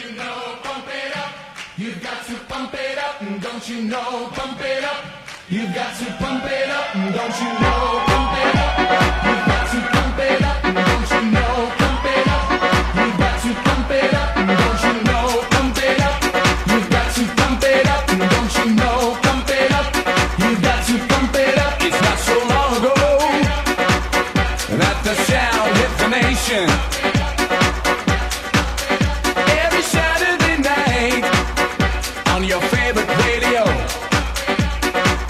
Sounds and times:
Music: 0:00.0 - 0:35.3.

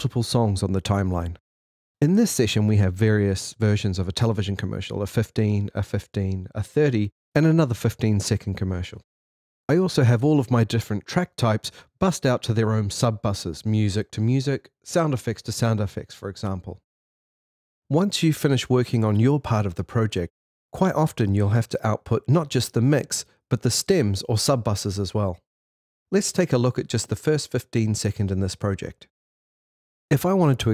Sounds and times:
Speech: 0:00.0 - 0:01.4, 0:02.0 - 0:09.0, 0:09.7 - 0:16.8, 0:17.9 - 0:25.4, 0:26.1 - 0:29.1, 0:30.1 - 0:30.7.

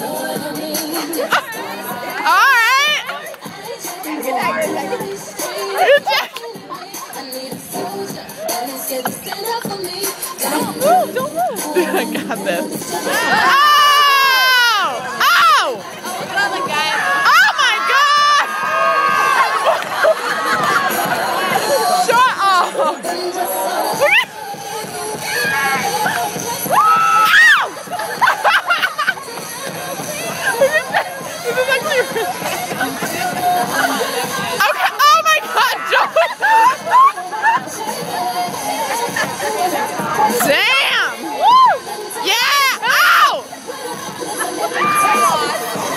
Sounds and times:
Crowd: 0:00.0 - 0:45.9
Music: 0:00.0 - 0:45.9.

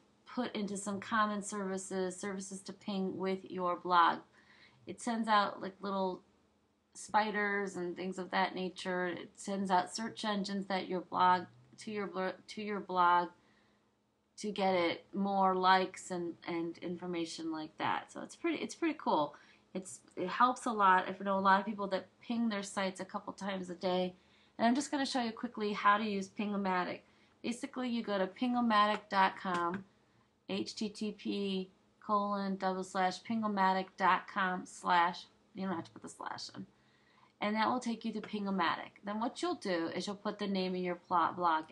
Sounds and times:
Speech: 0:00.3 - 0:06.3, 0:07.0 - 0:13.4, 0:14.4 - 0:29.9, 0:30.5 - 0:36.7, 0:37.4 - 0:41.7.

